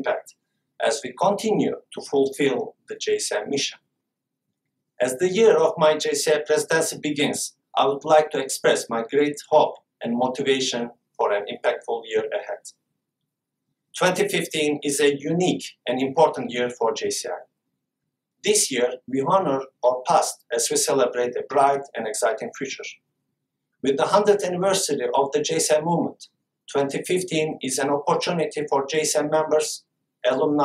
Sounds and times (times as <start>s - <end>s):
Male speech, man speaking: 0.0s - 3.8s, 5.0s - 12.8s, 14.0s - 17.5s, 18.5s - 23.0s, 23.8s - 30.6s
Narration, monologue: 0.0s - 30.6s.